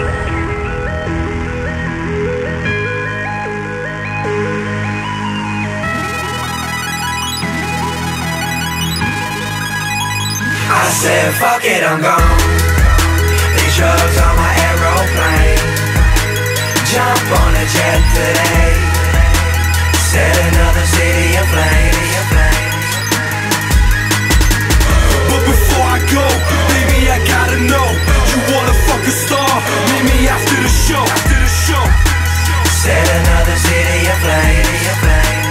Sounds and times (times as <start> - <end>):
Music: 0.0 - 35.5.